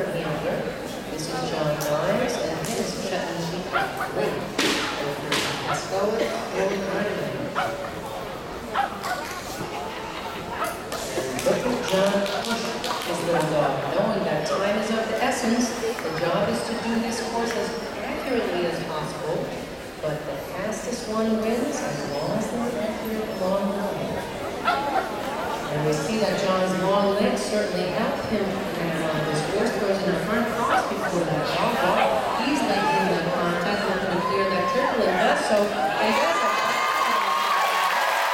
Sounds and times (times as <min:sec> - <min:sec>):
Speech: 0:00.0 - 0:08.3, 0:10.6 - 0:24.9, 0:25.6 - 0:37.6.